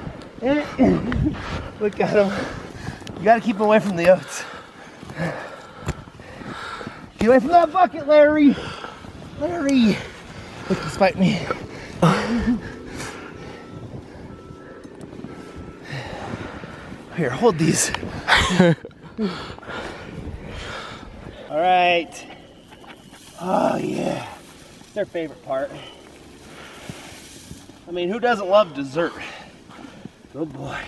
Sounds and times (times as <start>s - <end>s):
Outside, rural or natural: 0.0s - 30.8s.